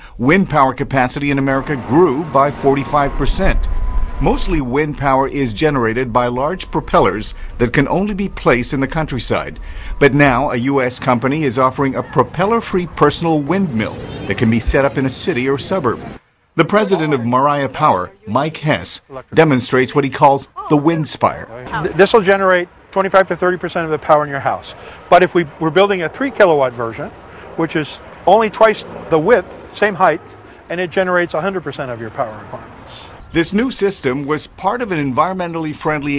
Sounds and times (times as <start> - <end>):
Wind: 0.0 - 36.1
Speech: 0.2 - 16.0, 16.6 - 36.1.